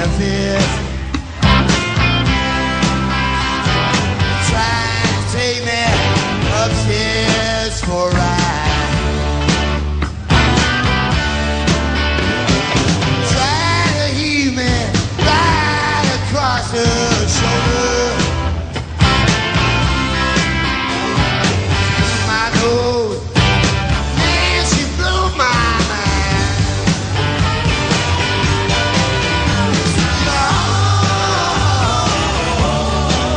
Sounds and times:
Music: 0.0 - 33.3.

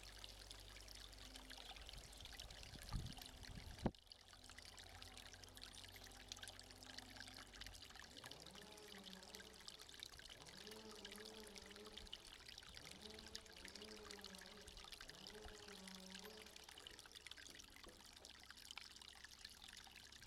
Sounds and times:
Pour: 0.0 - 20.2.

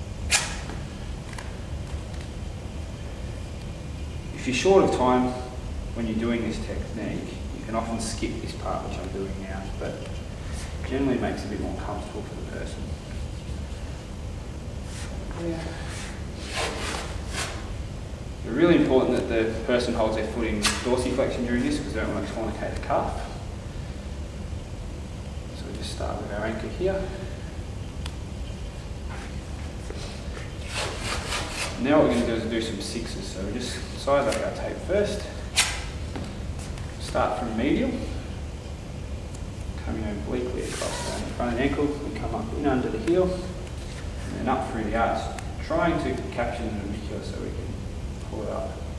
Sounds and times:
Speech: 4.4 - 10.1, 10.8 - 12.9, 15.4 - 15.8, 18.5 - 23.4, 25.6 - 27.2, 31.8 - 35.4, 37.0 - 38.2, 39.8 - 43.6, 44.3 - 48.8.

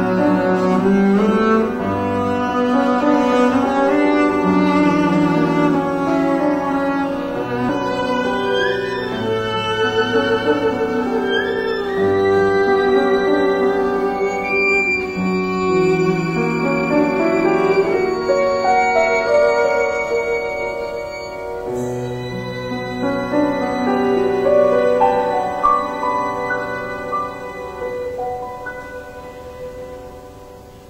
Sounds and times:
Cello: 0.0 - 30.8
Piano: 0.0 - 30.8
Violin, fiddle: 0.0 - 30.8.

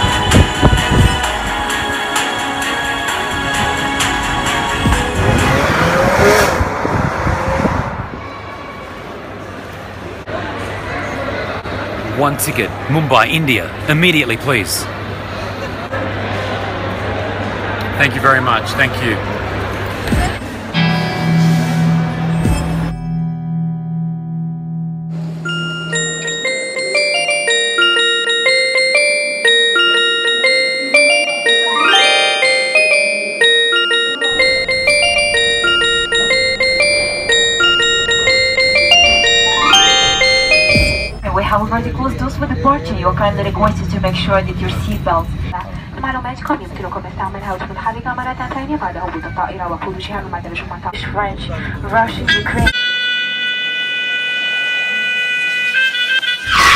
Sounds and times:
Mallet percussion: 25.3 - 41.4
Chime: 25.4 - 41.3.

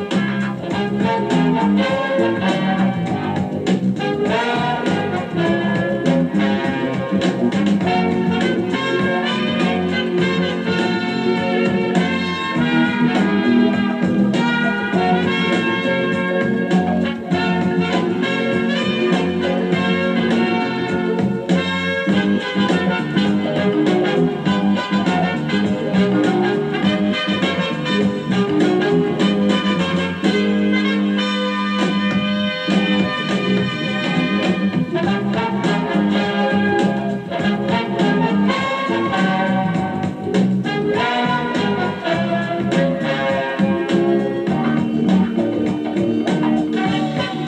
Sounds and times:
Music: 0.0 - 47.4.

